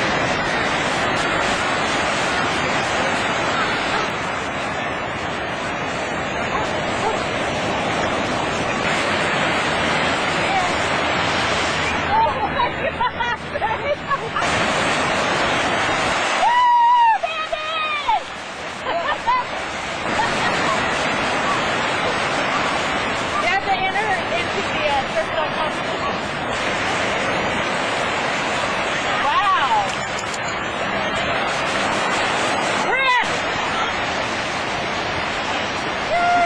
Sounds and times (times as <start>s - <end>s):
Waves, surf: 0.0s - 36.4s.